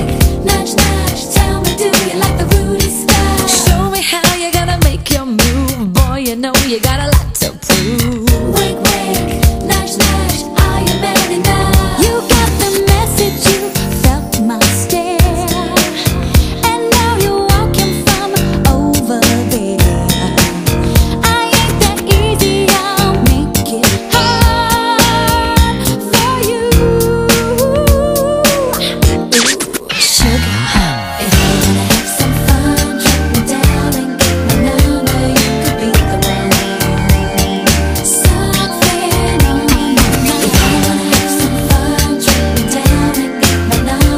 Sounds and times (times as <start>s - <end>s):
Funk: 0.0s - 44.1s.